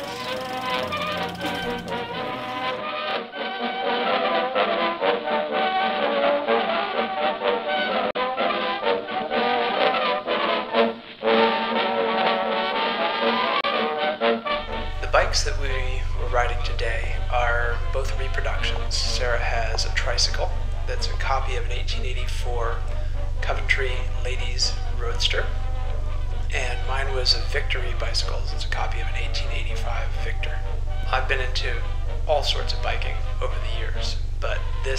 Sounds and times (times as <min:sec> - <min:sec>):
Music: 0:00.0 - 0:34.9
Speech: 0:14.9 - 0:22.8, 0:23.4 - 0:25.5, 0:26.5 - 0:34.9.